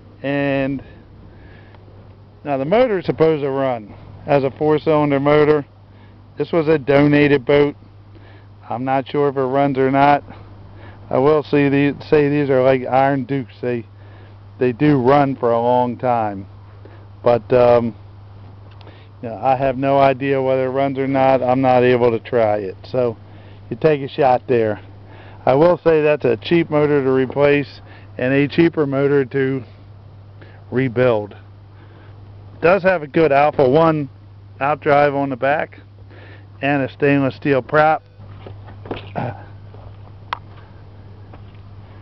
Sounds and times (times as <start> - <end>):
Speech: 0.2 - 0.9, 2.4 - 5.7, 6.4 - 7.8, 8.7 - 10.2, 11.1 - 13.9, 14.6 - 16.5, 17.3 - 18.0, 19.2 - 29.7, 30.7 - 31.4, 32.6 - 35.8, 36.6 - 38.0.